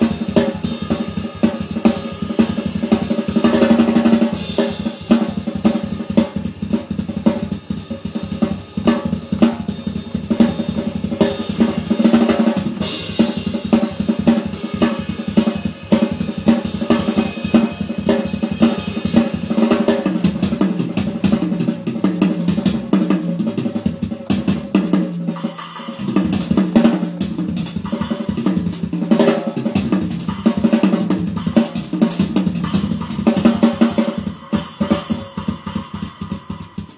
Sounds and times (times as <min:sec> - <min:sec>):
Drum: 0:00.0 - 0:36.9
Drum kit: 0:00.0 - 0:36.9.